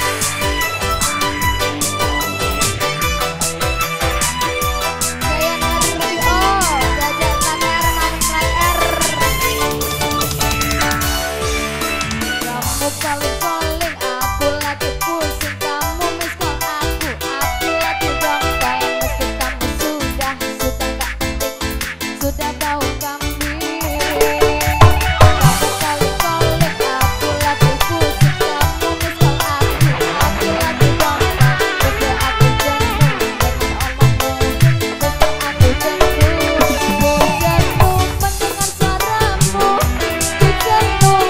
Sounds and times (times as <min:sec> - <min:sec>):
Music: 0:00.0 - 0:41.2.